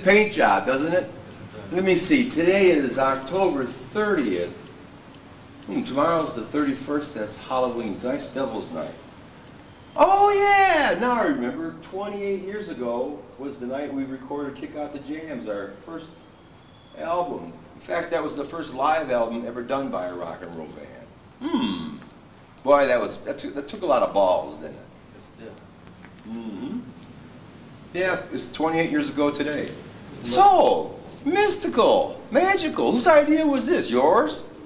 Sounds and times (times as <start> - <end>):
Speech: 0.0 - 4.6, 5.7 - 9.0, 10.0 - 16.2, 17.0 - 21.1, 22.6 - 25.7, 27.9 - 34.6.